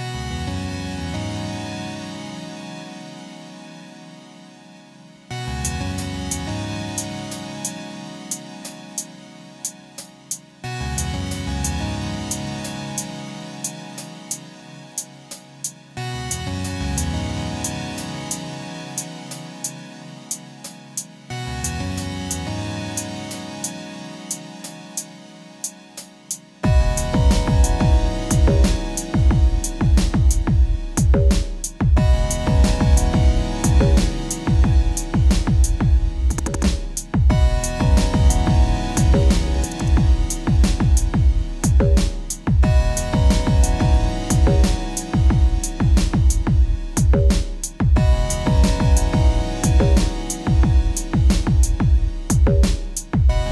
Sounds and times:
Electronica: 0.0s - 53.5s.

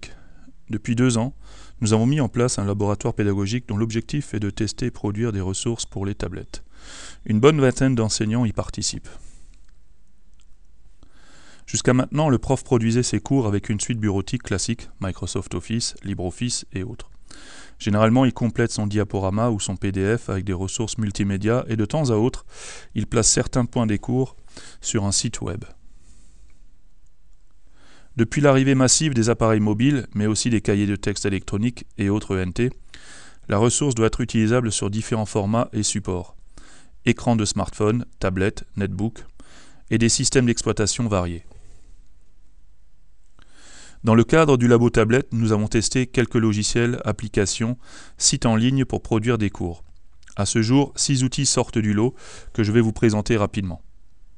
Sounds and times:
Speech: 0.0s - 6.6s, 7.2s - 9.2s, 11.7s - 17.1s, 17.8s - 25.8s, 28.2s - 32.8s, 33.5s - 36.4s, 37.1s - 39.3s, 39.9s - 41.5s, 44.0s - 53.9s.

